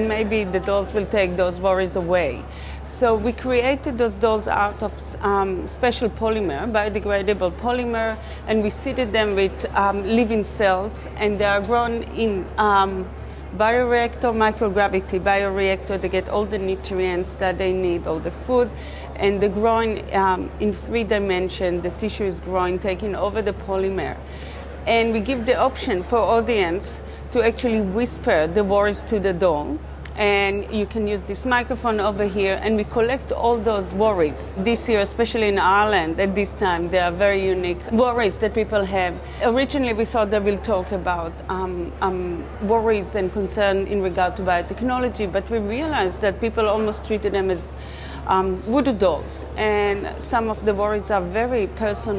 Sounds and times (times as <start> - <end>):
Female speech, woman speaking: 0.0 - 24.2, 24.8 - 52.1.